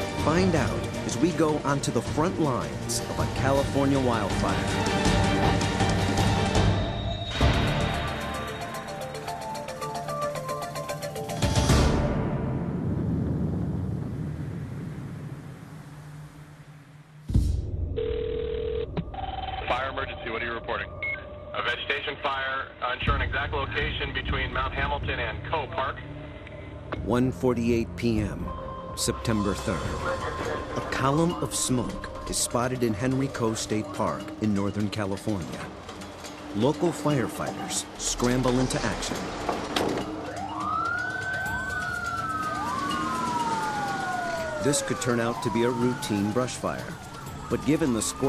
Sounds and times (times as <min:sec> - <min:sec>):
Music: 0:00.0 - 0:13.2, 0:17.2 - 0:18.0, 0:18.9 - 0:48.2.